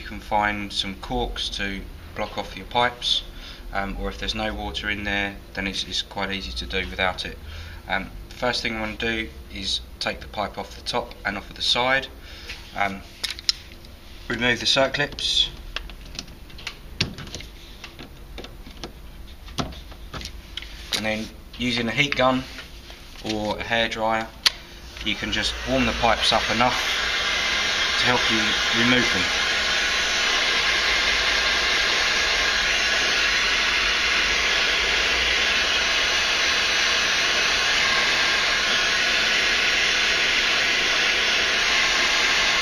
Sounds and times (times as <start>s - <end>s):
Speech: 0.0s - 12.1s, 12.8s - 13.1s, 14.3s - 15.6s, 21.0s - 22.6s, 23.2s - 24.4s, 25.0s - 26.8s, 28.0s - 29.3s.